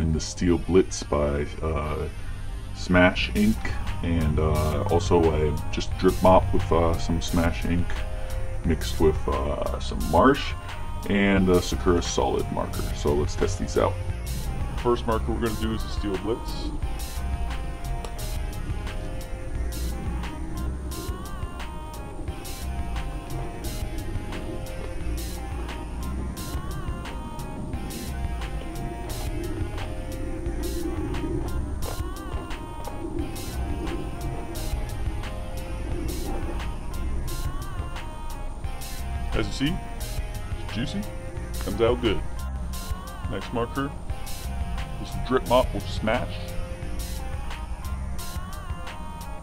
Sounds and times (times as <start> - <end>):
Music: 0.0 - 49.4.